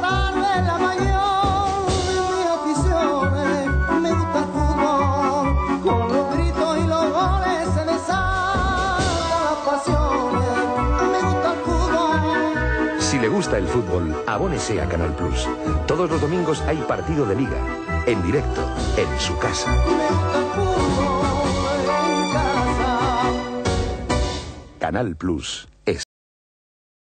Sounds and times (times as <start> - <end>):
Music: 0.0 - 25.0
Speech: 13.0 - 19.7, 24.8 - 26.1.